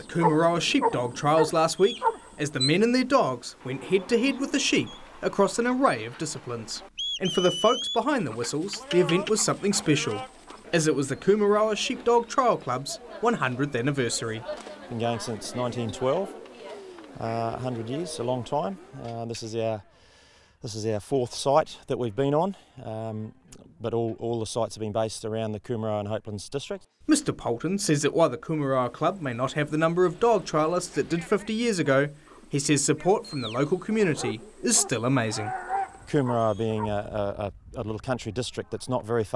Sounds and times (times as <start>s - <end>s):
Speech: 0.0s - 19.9s, 20.6s - 35.5s, 36.1s - 39.3s
Bark: 0.2s - 2.2s, 34.1s - 37.0s.